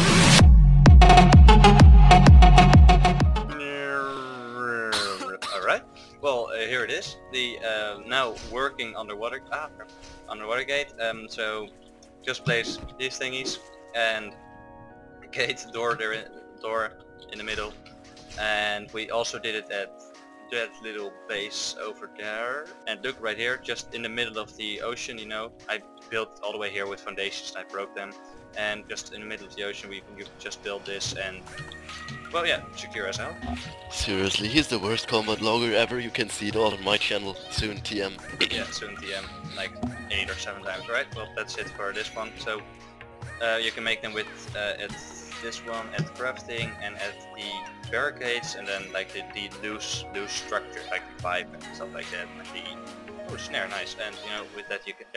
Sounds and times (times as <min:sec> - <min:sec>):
Music: 0:00.0 - 0:55.1
Speech: 0:03.6 - 0:11.7, 0:12.3 - 0:14.4, 0:15.3 - 0:17.8, 0:18.4 - 0:19.9, 0:20.5 - 0:42.6, 0:43.4 - 0:55.1.